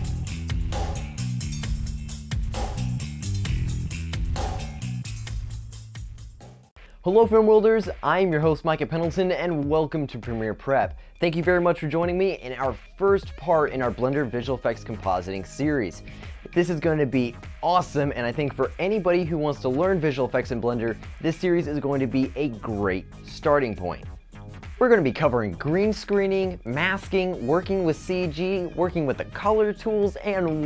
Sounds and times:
Music: 0.0 - 30.6
Speech: 7.0 - 24.1, 24.8 - 30.6.

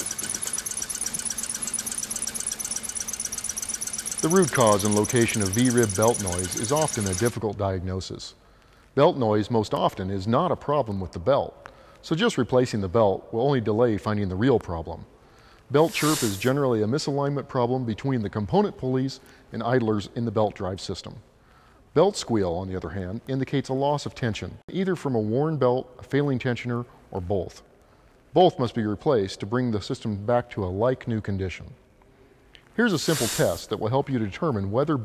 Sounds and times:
Speech: 4.2 - 8.4, 9.0 - 15.1, 15.7 - 21.2, 22.0 - 27.7, 28.4 - 31.8, 32.8 - 35.0.

